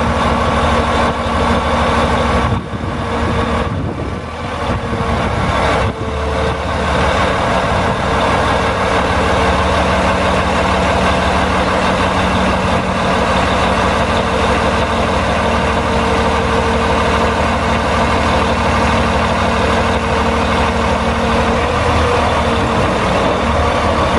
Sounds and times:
Truck: 0.0s - 24.1s.

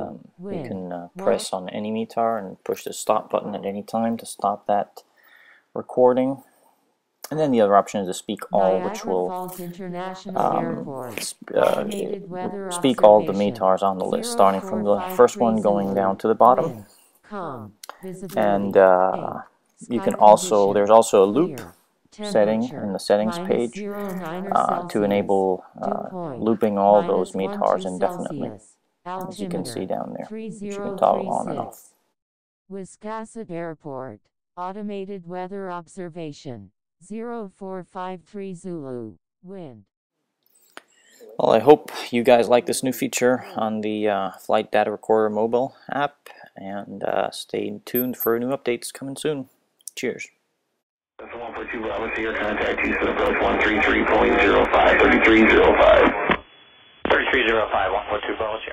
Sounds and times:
Speech: 0.0s - 5.0s, 5.8s - 6.4s, 7.3s - 31.9s, 32.7s - 39.8s, 41.2s - 50.3s, 51.2s - 56.2s, 57.1s - 58.7s
Radio: 0.5s - 1.7s, 8.4s - 16.8s, 17.9s - 31.8s, 51.2s - 56.4s, 57.1s - 58.7s.

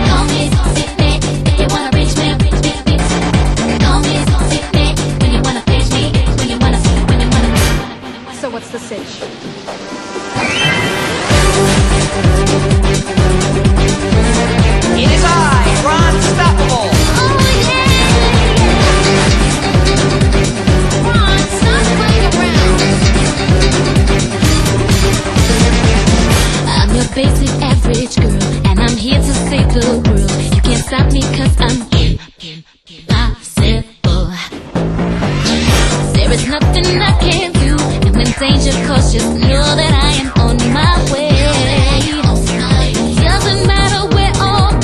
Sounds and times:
Music: 0.0s - 44.8s
Speech: 8.4s - 9.2s.

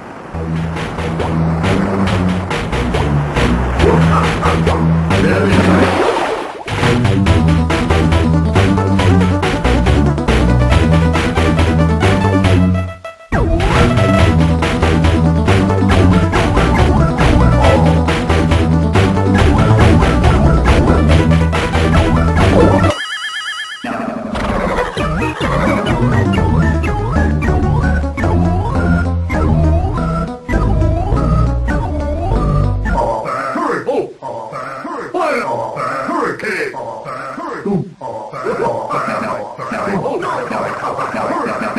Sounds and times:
Video game music: 0.0s - 33.3s.

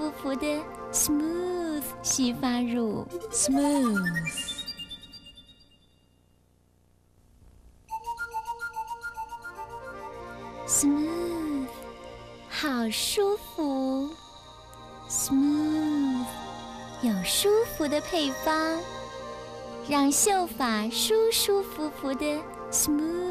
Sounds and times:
Speech: 0.0s - 4.5s, 12.5s - 14.2s, 17.0s - 18.8s, 19.9s - 23.3s
Music: 0.0s - 6.3s, 7.9s - 23.3s.

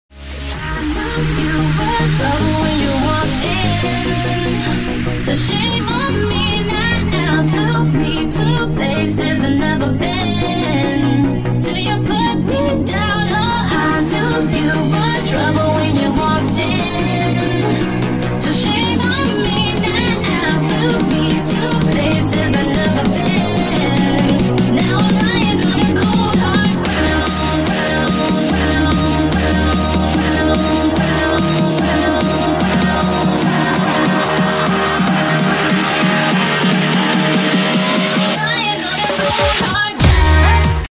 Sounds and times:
Music: 0.0s - 40.9s.

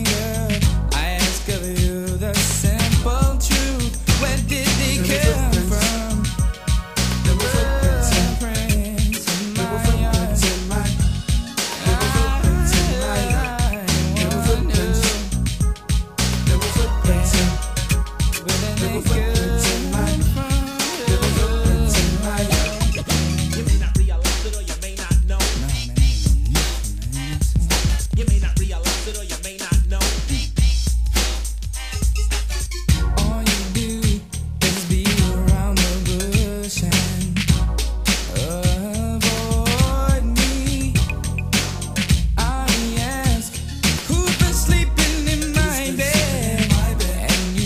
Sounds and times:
Hip hop music: 0.0s - 47.6s
Rhythm and blues: 0.0s - 47.6s.

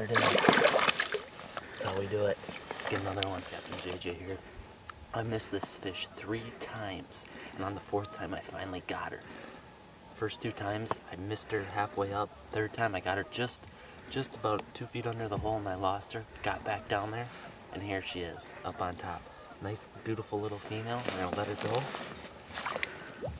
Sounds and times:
Speech: 1.8s - 4.4s, 5.2s - 9.2s, 10.2s - 22.0s.

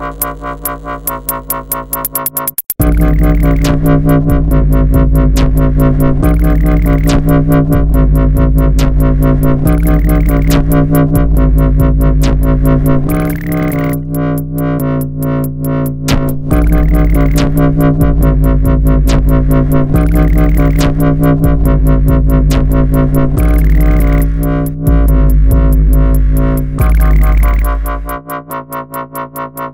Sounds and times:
Dubstep: 0.0s - 29.7s.

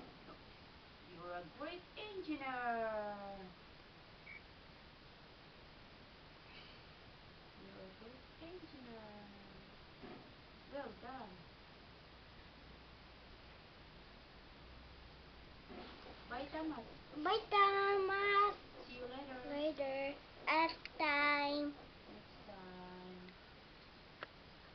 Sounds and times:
Child speech, kid speaking: 17.2s - 18.6s, 19.3s - 21.8s.

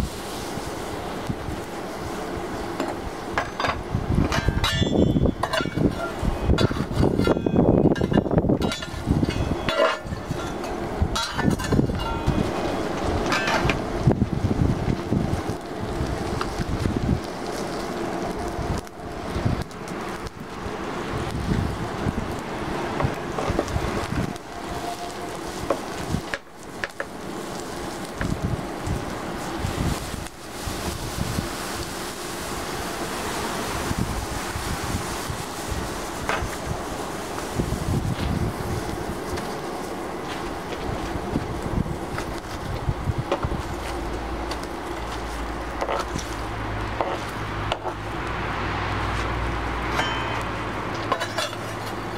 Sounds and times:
Fire: 0.0s - 52.1s
Wind noise (microphone): 3.6s - 17.5s, 18.4s - 19.7s, 20.3s - 25.0s, 25.6s - 26.4s, 28.1s - 32.0s, 33.6s - 39.5s, 40.7s - 44.0s.

